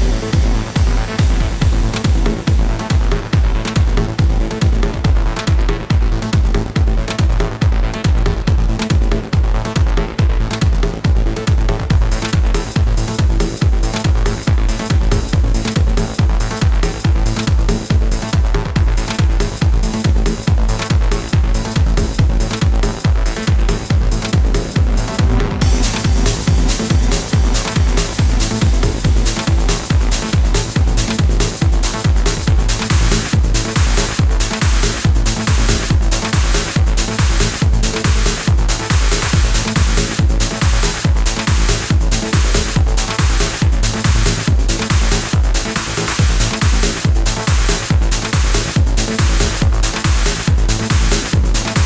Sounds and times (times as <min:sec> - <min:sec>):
Trance music: 0:00.0 - 0:51.8.